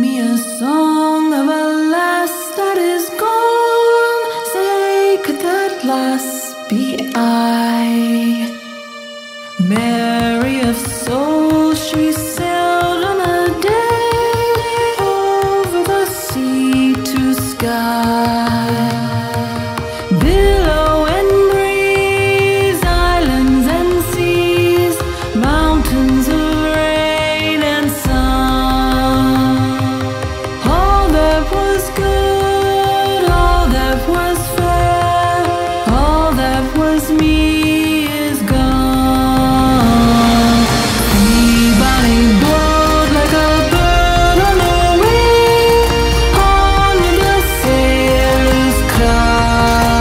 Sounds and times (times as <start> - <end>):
Music: 0.0 - 50.0.